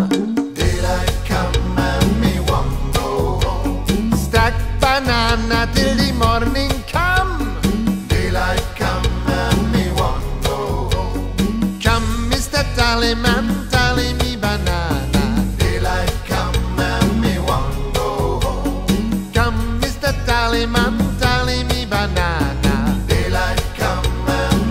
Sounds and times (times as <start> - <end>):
Music: 0.0 - 24.7.